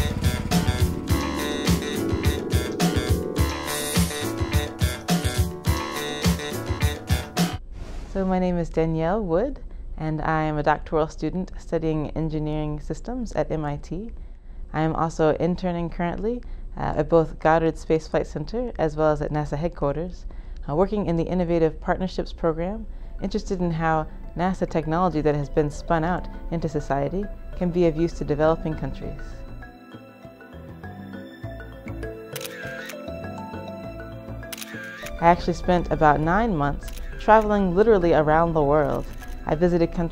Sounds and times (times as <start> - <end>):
Music: 0.0 - 7.6, 23.1 - 40.1
Speech: 8.2 - 14.1, 14.8 - 29.2, 35.2 - 40.1.